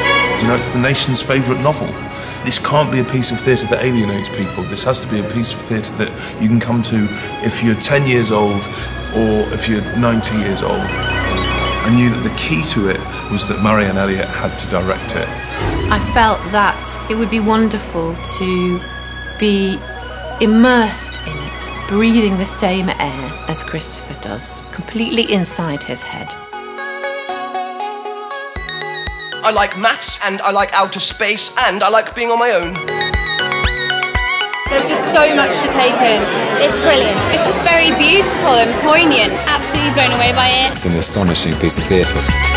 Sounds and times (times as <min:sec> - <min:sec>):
Music: 0:00.0 - 0:42.5
Speech: 0:02.5 - 0:10.9, 0:15.9 - 0:18.8, 0:29.4 - 0:32.8, 0:34.7 - 0:42.2.